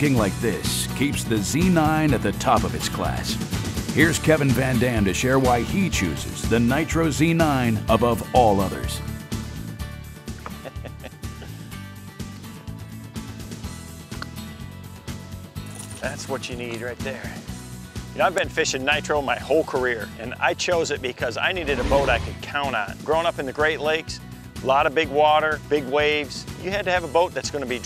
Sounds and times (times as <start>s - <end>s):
Speech: 0.0s - 3.4s, 4.0s - 9.0s, 16.0s - 17.4s, 18.2s - 27.8s
Music: 0.0s - 27.8s.